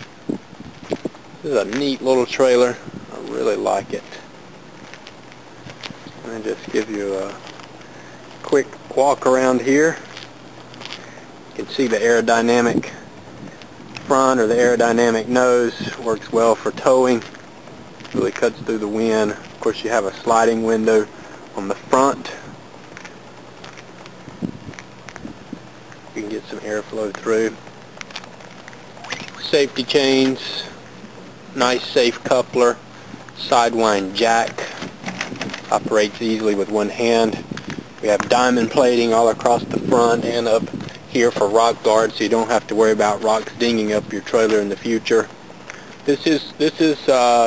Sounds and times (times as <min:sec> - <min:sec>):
Speech: 0:01.4 - 0:04.3, 0:06.2 - 0:07.4, 0:08.4 - 0:10.0, 0:11.6 - 0:13.0, 0:14.1 - 0:17.3, 0:18.2 - 0:22.5, 0:26.2 - 0:27.6, 0:29.4 - 0:30.8, 0:31.6 - 0:32.8, 0:33.4 - 0:34.8, 0:35.7 - 0:37.4, 0:38.0 - 0:45.3, 0:46.0 - 0:47.4.